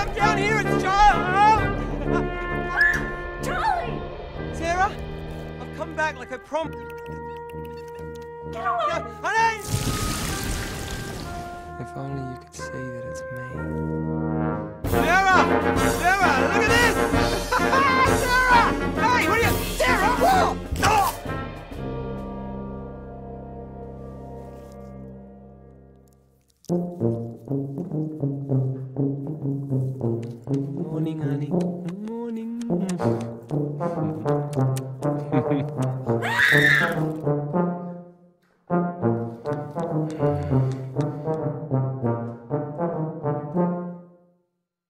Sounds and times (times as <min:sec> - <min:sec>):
Brass instrument: 0:00.0 - 0:31.9, 0:32.7 - 0:44.5.